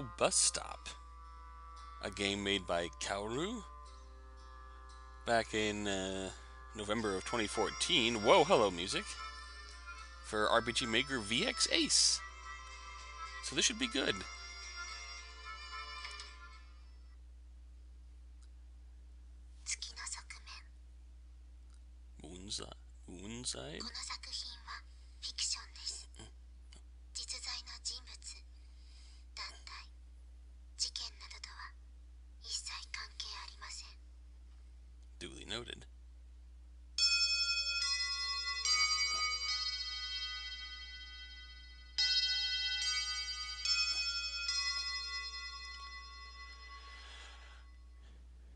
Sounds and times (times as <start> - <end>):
Speech: 0.0 - 1.0, 2.0 - 3.7, 5.3 - 9.1, 10.3 - 12.2, 13.4 - 14.3, 22.2 - 24.0, 35.2 - 35.9.